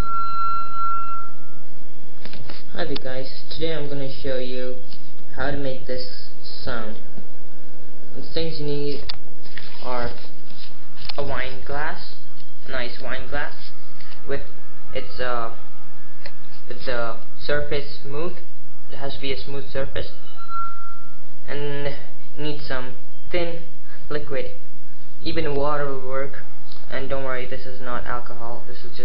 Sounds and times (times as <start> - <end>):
Speech: 2.7 - 7.1, 8.2 - 9.1, 9.8 - 10.2, 11.1 - 13.7, 14.3 - 15.6, 16.7 - 20.2, 21.5 - 24.6, 25.2 - 29.0.